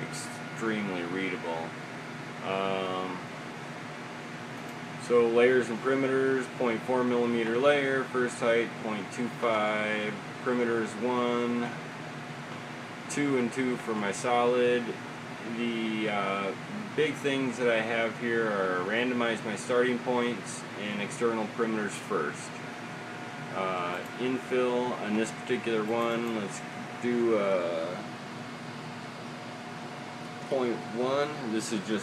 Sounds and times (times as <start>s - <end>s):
Speech: 0.0s - 1.7s, 2.4s - 3.2s, 5.0s - 11.8s, 13.1s - 22.6s, 23.6s - 28.1s, 30.5s - 32.0s.